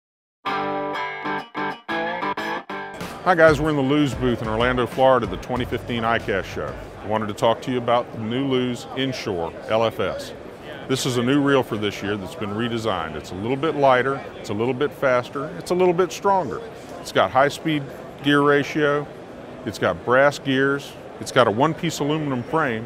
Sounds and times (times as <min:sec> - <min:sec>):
Music: 0:00.4 - 0:07.0
Distortion: 0:00.5 - 0:07.4
Speech: 0:03.2 - 0:22.8.